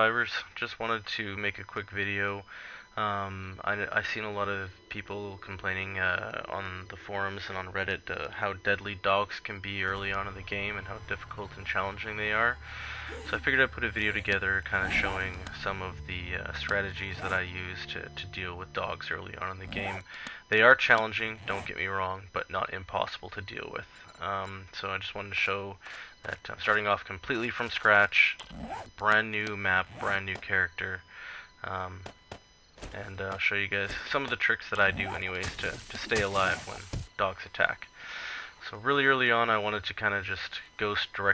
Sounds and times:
Speech: 0.0s - 32.1s, 32.9s - 41.3s.

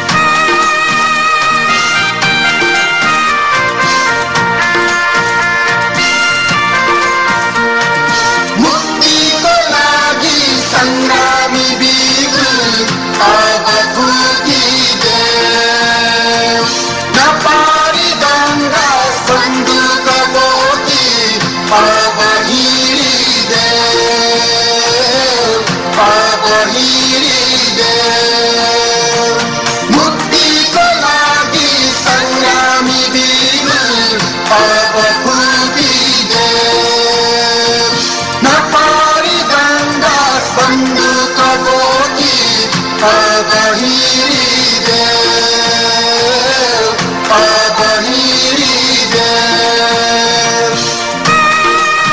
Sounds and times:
Music: 0.0s - 52.1s.

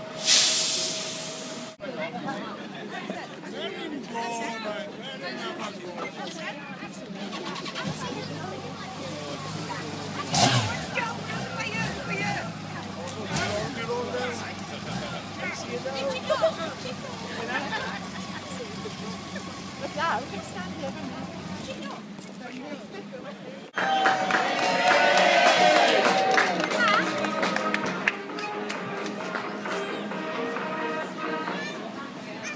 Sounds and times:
Music: 26.1s - 32.5s.

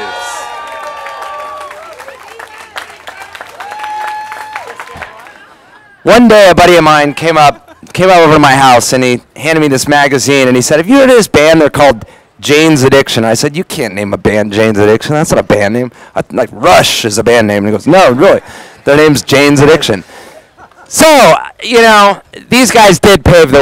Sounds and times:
Speech: 6.0s - 20.0s, 20.9s - 23.6s.

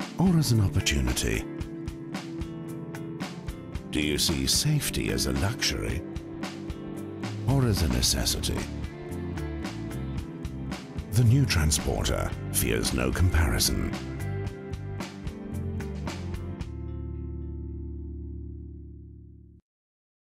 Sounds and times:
Music: 0.0s - 19.6s
Speech: 0.2s - 1.5s, 3.9s - 6.0s, 7.4s - 8.7s, 11.1s - 14.0s.

